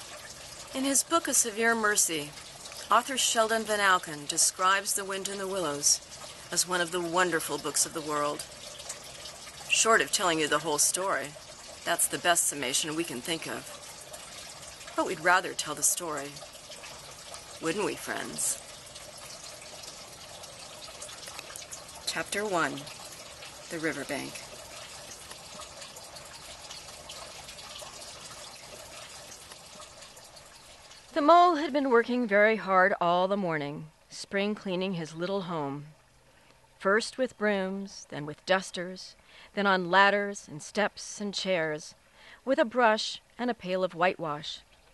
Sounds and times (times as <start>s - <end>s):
Speech: 0.8s - 2.3s, 2.9s - 8.4s, 9.7s - 13.6s, 15.0s - 16.4s, 17.6s - 18.6s, 22.1s - 22.9s, 23.7s - 24.4s, 31.2s - 35.9s, 36.8s - 44.6s.